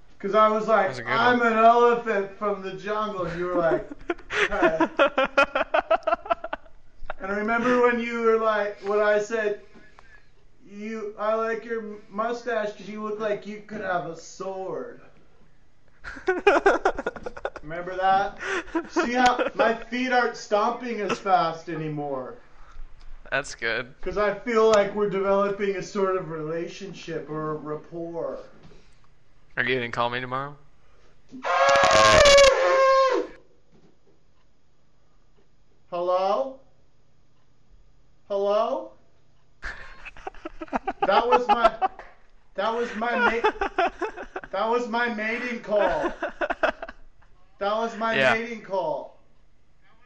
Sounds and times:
Speech: 0.2 - 3.9, 7.2 - 9.6, 10.7 - 15.1, 23.3 - 28.5, 36.0 - 36.7, 38.3 - 39.0, 41.1 - 41.9, 42.6 - 43.5, 44.5 - 46.1, 47.6 - 49.2.

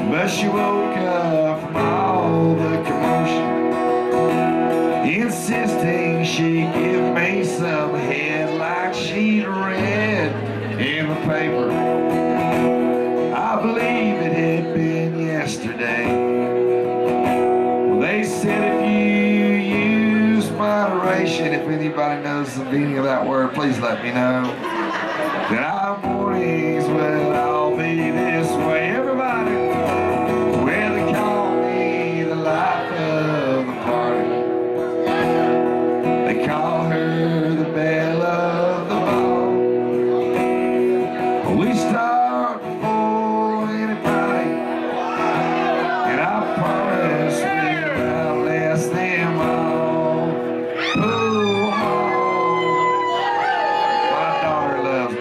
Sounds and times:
Singing: 0.0 - 3.5, 5.0 - 11.9, 13.3 - 16.5, 25.5 - 29.9, 30.5 - 34.4, 35.0 - 40.4, 41.2 - 55.2
Country: 0.0 - 55.2.

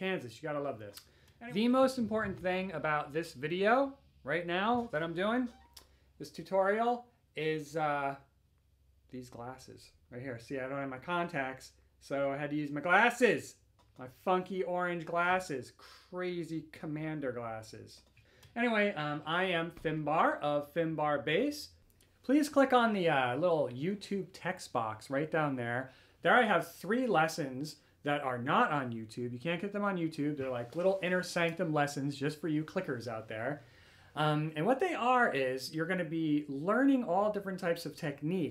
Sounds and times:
Speech: 0.0 - 5.6, 6.2 - 8.3, 9.1 - 33.6, 34.2 - 38.5.

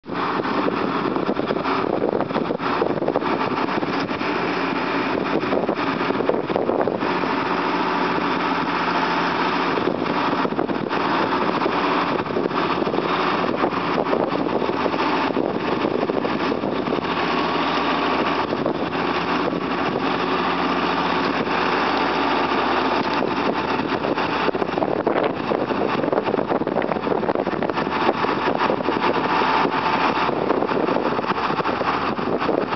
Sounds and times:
Vehicle: 0.0 - 32.7.

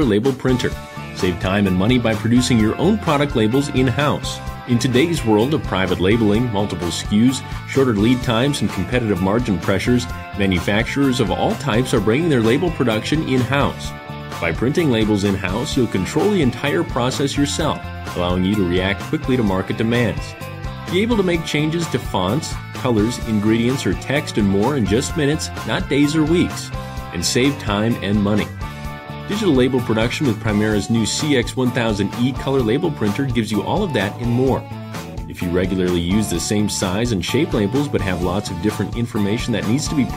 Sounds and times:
Speech: 0.0 - 28.6, 29.3 - 34.7, 35.3 - 40.1
Music: 0.0 - 40.1.

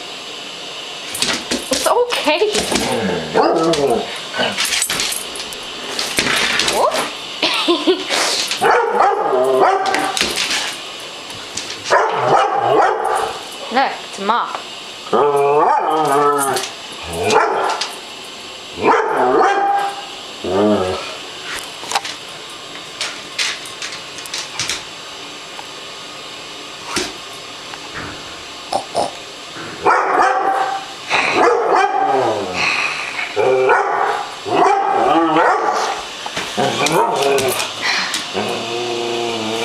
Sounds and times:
Speech: 1.8 - 2.8, 13.7 - 14.6
Bow-wow: 8.6 - 10.2, 11.9 - 13.4, 15.1 - 16.6, 17.2 - 17.8, 18.8 - 20.0, 29.8 - 32.4, 33.4 - 36.0, 36.6 - 37.6.

